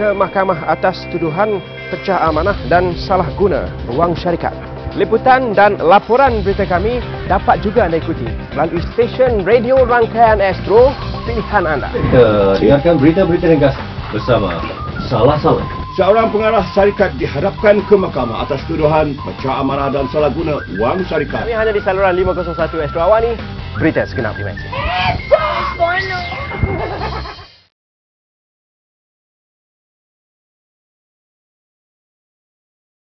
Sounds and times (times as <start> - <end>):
Music: 0.0 - 27.7.